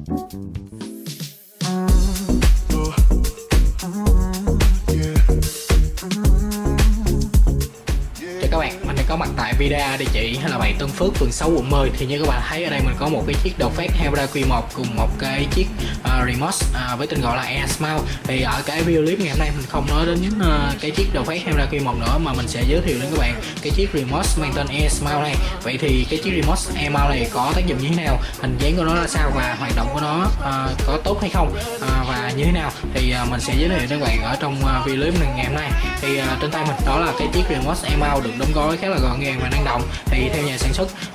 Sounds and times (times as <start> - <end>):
Music: 0.0 - 41.1
Speech: 8.2 - 41.1.